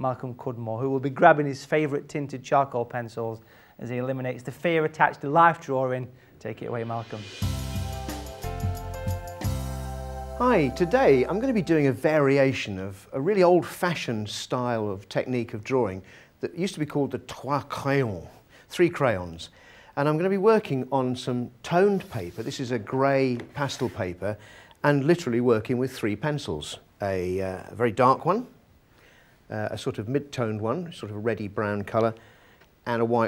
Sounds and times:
Speech: 0.0 - 7.4, 10.4 - 28.6, 29.5 - 32.2, 32.8 - 33.2.

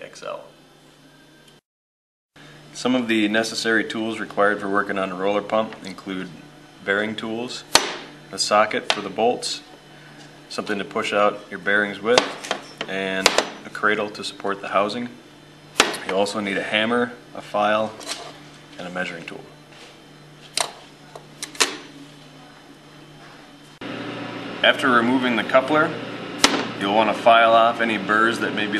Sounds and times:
Speech: 0.0 - 0.5, 2.8 - 7.7, 8.3 - 9.7, 10.5 - 12.3, 12.9 - 15.2, 16.0 - 18.0, 18.8 - 19.6, 24.6 - 26.0, 26.8 - 28.7.

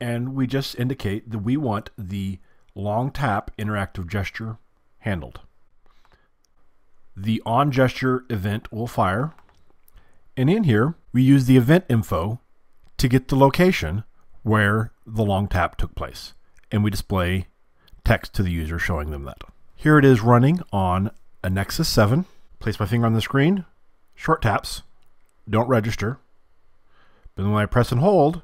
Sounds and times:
Speech: 0.0 - 5.5, 7.2 - 9.4, 10.4 - 26.3, 27.4 - 28.4.

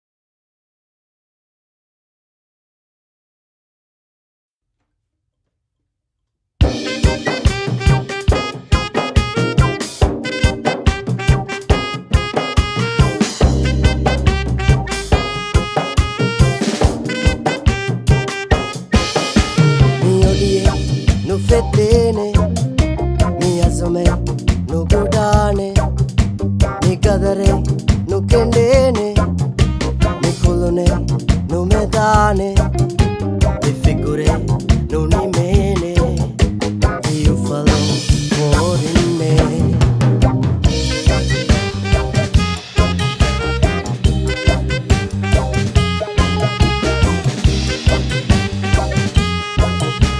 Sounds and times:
Funk: 6.6 - 50.1
Pop music: 6.7 - 25.9, 26.7 - 50.1.

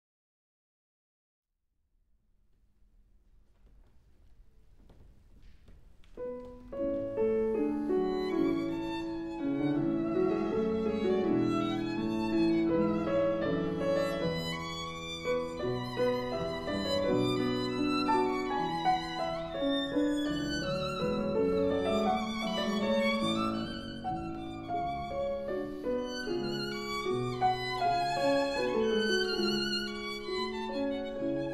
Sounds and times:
Violin, fiddle: 6.3 - 31.5.

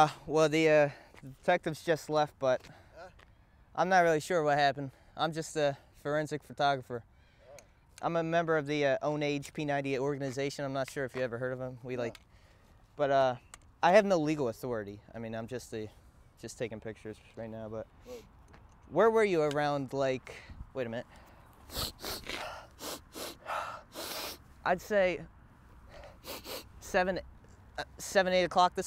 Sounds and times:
Speech: 8.0 - 12.2, 13.0 - 17.9, 24.7 - 25.3, 26.8 - 27.2, 27.8 - 28.8.

